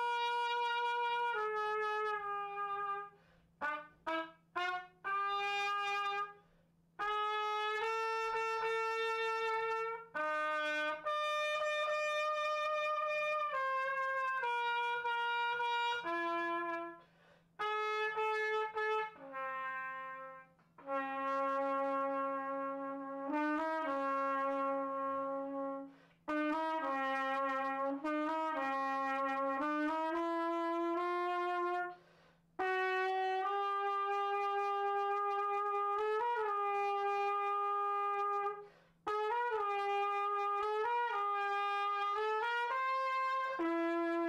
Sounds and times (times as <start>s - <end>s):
Trumpet: 0.0s - 44.2s.